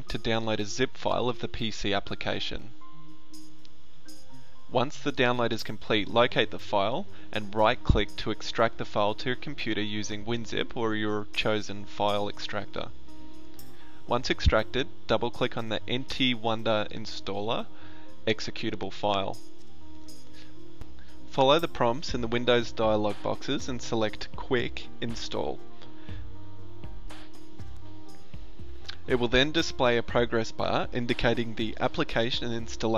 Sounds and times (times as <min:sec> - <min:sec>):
Speech: 0:00.0 - 0:02.7, 0:04.8 - 0:12.9, 0:14.1 - 0:17.7, 0:18.3 - 0:19.4, 0:21.4 - 0:25.6, 0:29.0 - 0:32.9
Music: 0:00.0 - 0:32.9.